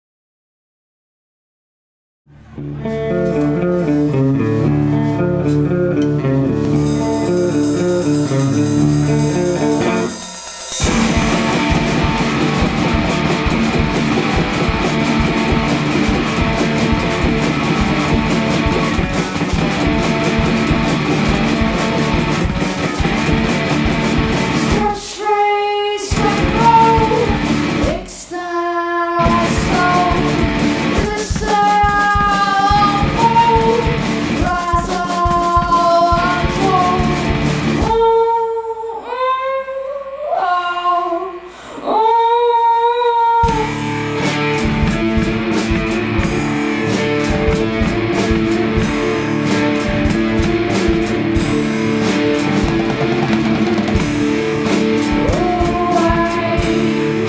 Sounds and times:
Music: 0:02.2 - 0:57.2.

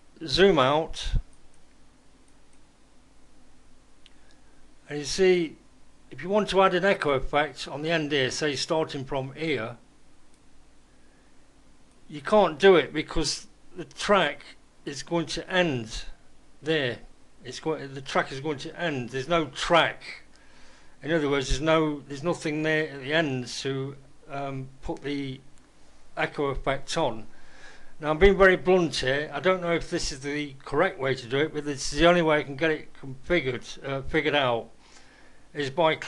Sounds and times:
Speech: 0:00.2 - 0:01.3, 0:04.9 - 0:09.8, 0:12.1 - 0:20.3, 0:21.0 - 0:25.5, 0:26.2 - 0:27.3, 0:28.0 - 0:34.7, 0:35.5 - 0:36.0.

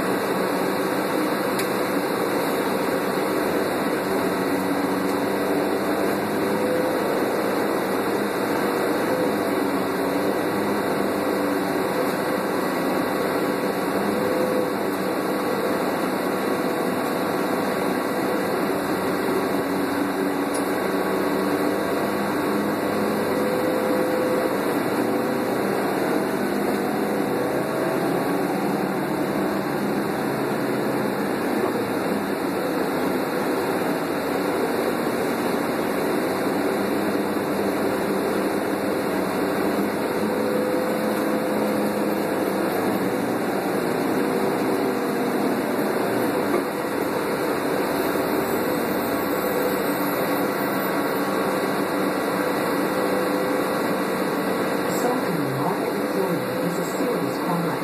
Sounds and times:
Bus: 0:00.0 - 0:57.8.

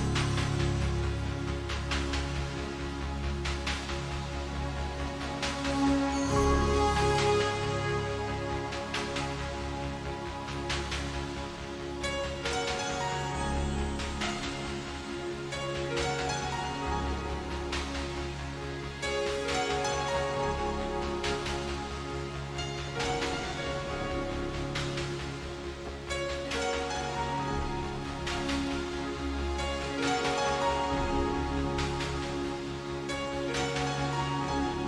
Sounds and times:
Music: 0:00.0 - 0:34.8.

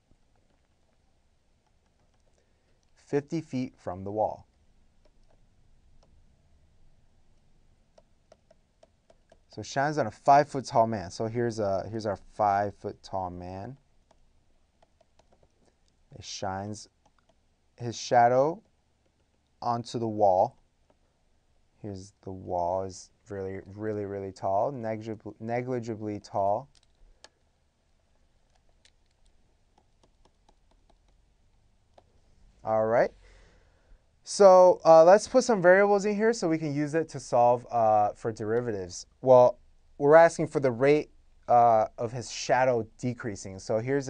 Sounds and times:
Inside, small room: 0:00.0 - 0:44.1
Speech: 0:03.0 - 0:04.5, 0:09.6 - 0:13.8, 0:16.1 - 0:16.9, 0:17.8 - 0:18.6, 0:19.6 - 0:20.6, 0:21.8 - 0:26.7, 0:32.6 - 0:33.2, 0:34.2 - 0:44.1.

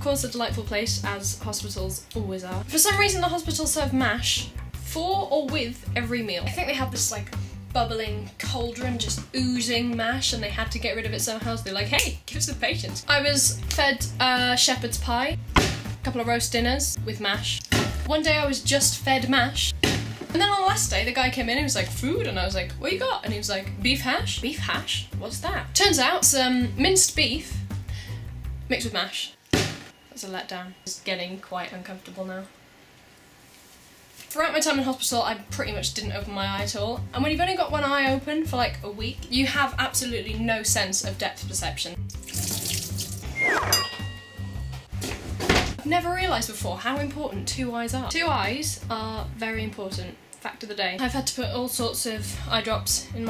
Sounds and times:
Speech: 0:00.0 - 0:15.4, 0:16.0 - 0:27.6, 0:28.7 - 0:29.4, 0:30.1 - 0:32.5, 0:34.3 - 0:42.0, 0:45.8 - 0:53.2
Music: 0:00.0 - 0:30.1, 0:34.6 - 0:50.2, 0:51.0 - 0:53.2.

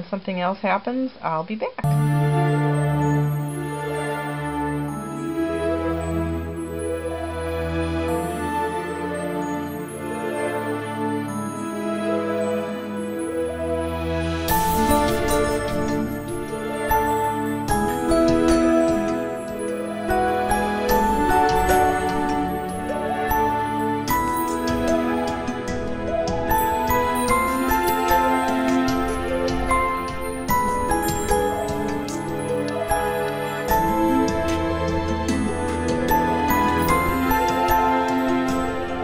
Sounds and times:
New-age music: 0:01.8 - 0:39.0.

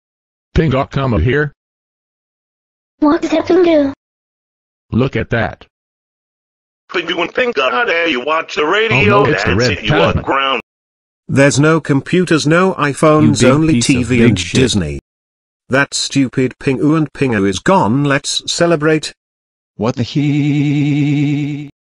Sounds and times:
Speech: 0:00.6 - 0:01.6, 0:03.0 - 0:04.0, 0:05.0 - 0:05.7, 0:06.9 - 0:10.6, 0:11.3 - 0:15.0, 0:15.7 - 0:19.2, 0:19.8 - 0:21.0.

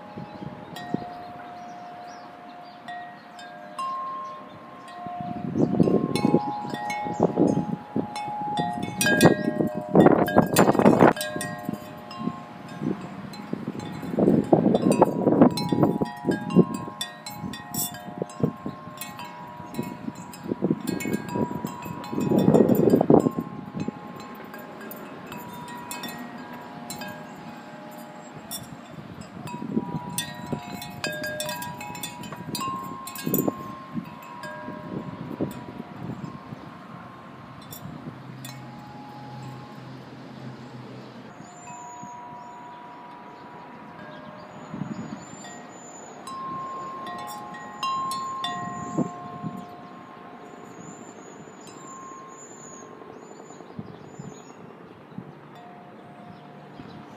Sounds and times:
Wind chime: 0:00.0 - 0:54.8, 0:55.5 - 0:57.1.

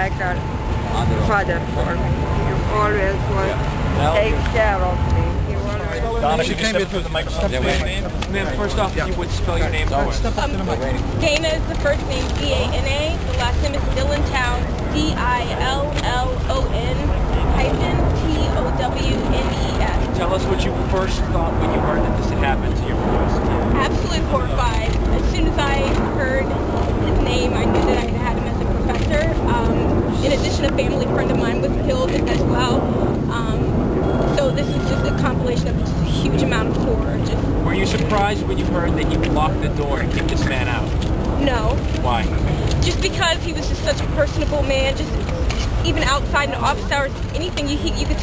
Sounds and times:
Outside, urban or manmade: 0:00.0 - 0:48.2
Speech: 0:00.0 - 0:48.2.

